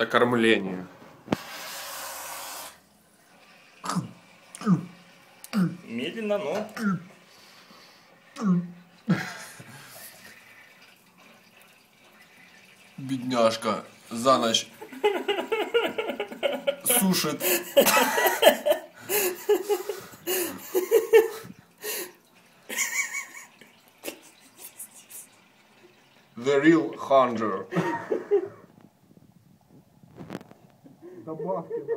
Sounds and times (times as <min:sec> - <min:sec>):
Water: 0:00.0 - 0:29.0
Water tap, faucet: 0:01.3 - 0:28.6
Speech: 0:26.4 - 0:27.7.